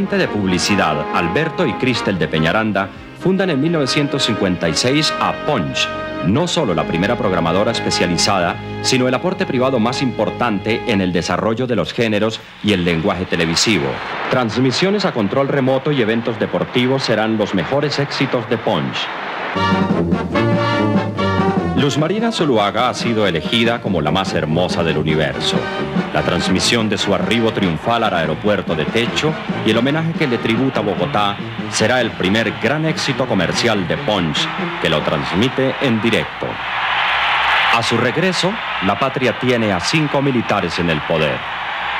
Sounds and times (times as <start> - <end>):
Music: 0.0 - 14.0, 19.5 - 41.9
Speech: 0.0 - 19.1, 21.7 - 25.6, 26.2 - 36.6, 37.7 - 41.4.